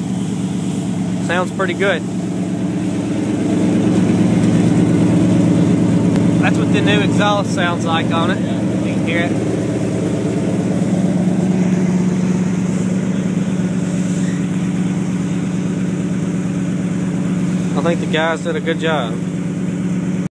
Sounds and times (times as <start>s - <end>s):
Car: 0.0s - 20.3s
Speech: 1.2s - 2.0s, 6.4s - 9.4s, 17.7s - 19.2s.